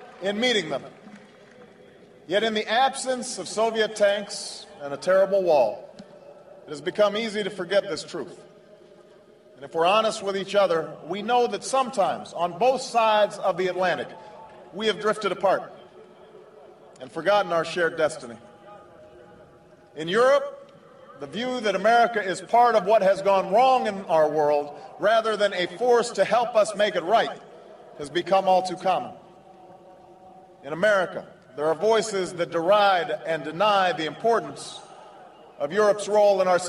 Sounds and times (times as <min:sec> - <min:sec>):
Male speech, man speaking: 0:00.0 - 0:00.9, 0:02.3 - 0:05.9, 0:06.7 - 0:08.4, 0:09.6 - 0:15.7, 0:17.0 - 0:19.4, 0:20.0 - 0:27.4, 0:28.0 - 0:29.2, 0:30.6 - 0:34.8, 0:35.6 - 0:36.6
Narration, monologue: 0:00.0 - 0:16.2, 0:16.9 - 0:36.6.